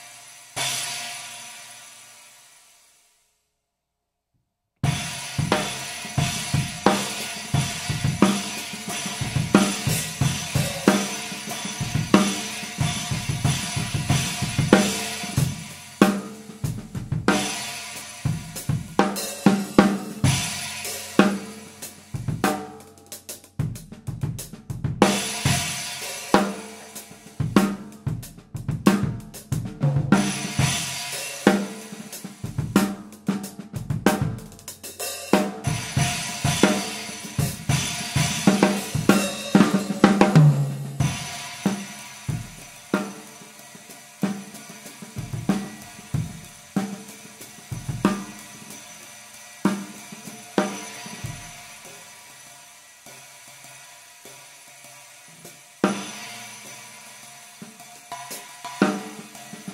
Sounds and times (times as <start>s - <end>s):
Drum kit: 0.0s - 3.0s, 4.8s - 59.7s
Drum roll: 4.8s - 59.7s
Hi-hat: 5.4s - 24.2s.